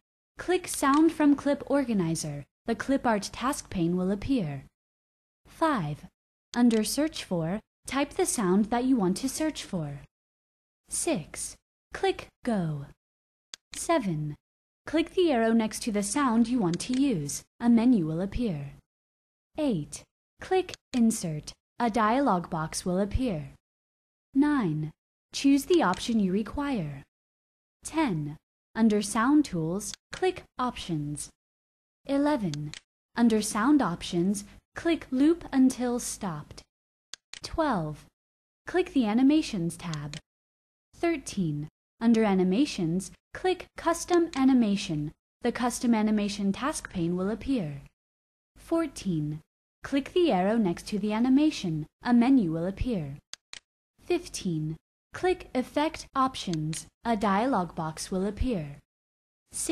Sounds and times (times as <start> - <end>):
Speech: 0.4 - 4.7, 5.5 - 10.1, 10.9 - 13.0, 13.8 - 18.8, 19.6 - 23.6, 24.4 - 27.1, 27.8 - 31.4, 32.1 - 36.7, 37.4 - 38.1, 38.7 - 40.2, 41.0 - 47.9, 48.6 - 53.2, 54.1 - 58.8.